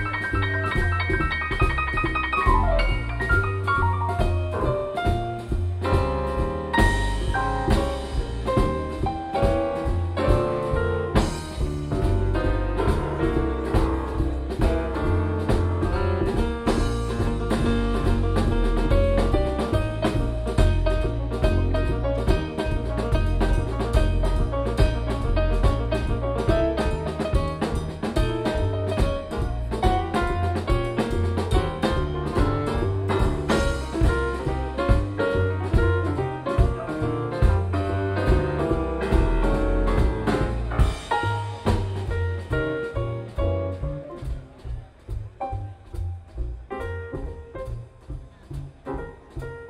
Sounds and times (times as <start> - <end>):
Drum: 0.0 - 49.7
Drum kit: 0.0 - 49.7
Jazz: 0.0 - 49.7.